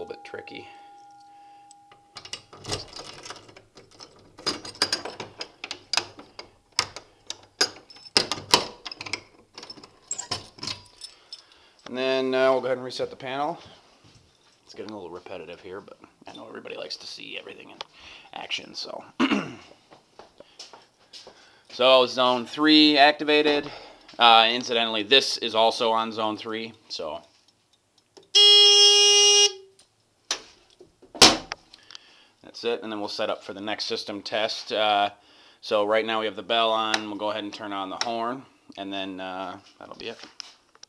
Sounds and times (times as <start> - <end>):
Speech: 0.0 - 0.8, 11.9 - 13.8, 14.7 - 19.2, 21.8 - 27.3, 32.4 - 40.3.